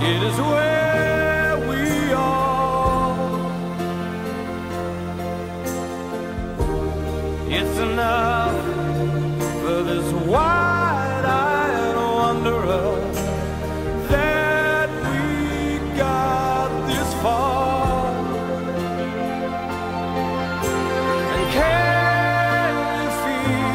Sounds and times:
Tender music: 0.0s - 23.7s.

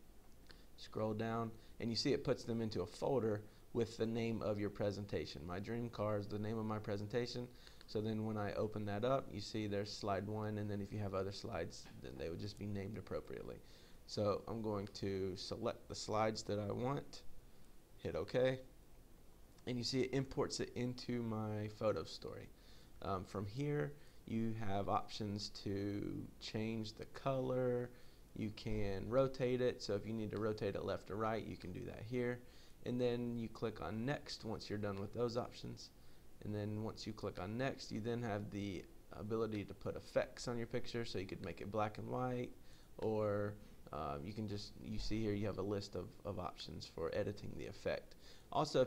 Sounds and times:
Narration, monologue: 0.0s - 48.8s.

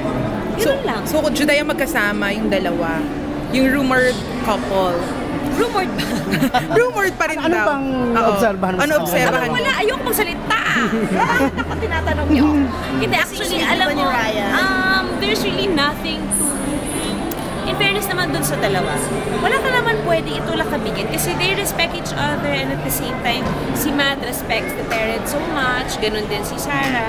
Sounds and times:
Inside, public space: 0.0s - 27.0s.

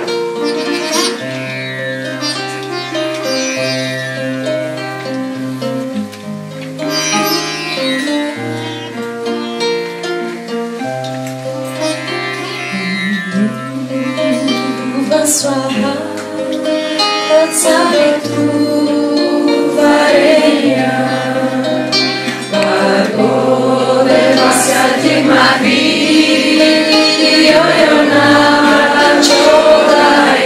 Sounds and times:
Choir: 14.2s - 30.4s
Mantra: 14.2s - 30.4s.

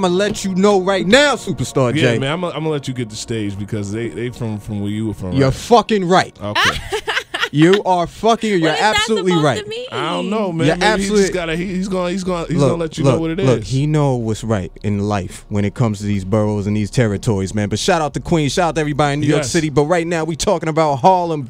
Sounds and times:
Speech: 0.0s - 6.7s, 7.6s - 21.4s.

